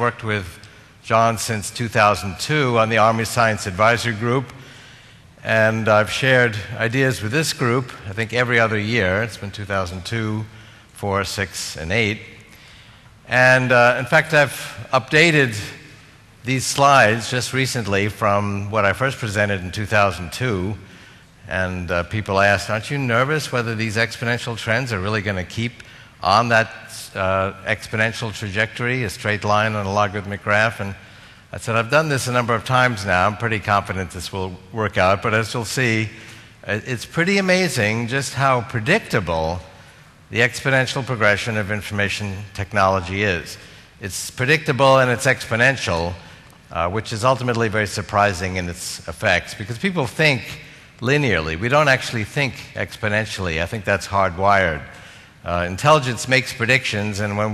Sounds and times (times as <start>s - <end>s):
Speech: 0.0s - 4.6s, 5.4s - 12.4s, 13.3s - 57.5s.